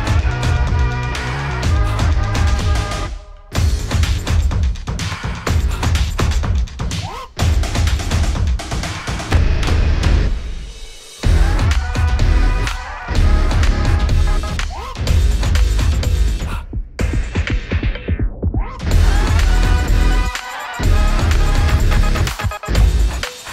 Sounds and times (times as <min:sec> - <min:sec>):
Music: 0:00.0 - 0:23.5.